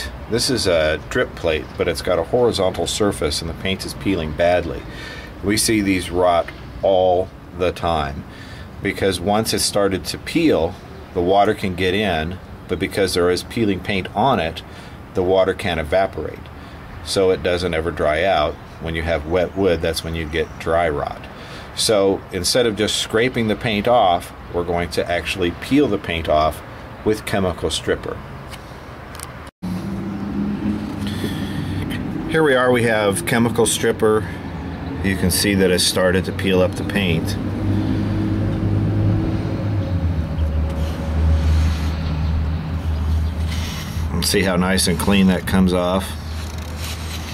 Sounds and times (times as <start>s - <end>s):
Speech: 0.0s - 28.2s, 32.3s - 34.4s, 35.0s - 37.4s, 44.1s - 46.2s.